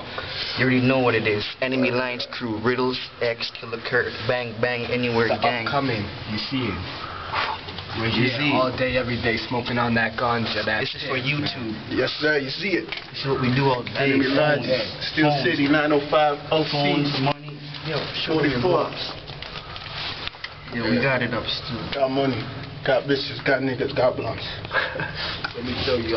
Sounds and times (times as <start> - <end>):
Speech: 0.6 - 6.9, 7.9 - 19.1, 25.5 - 26.1.